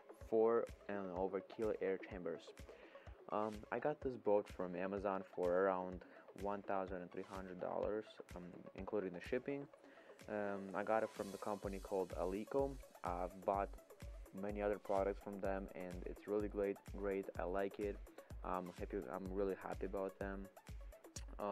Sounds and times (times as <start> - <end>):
Speech: 0.3 - 2.5, 3.3 - 9.7, 10.3 - 13.7, 14.4 - 20.5, 21.2 - 21.5.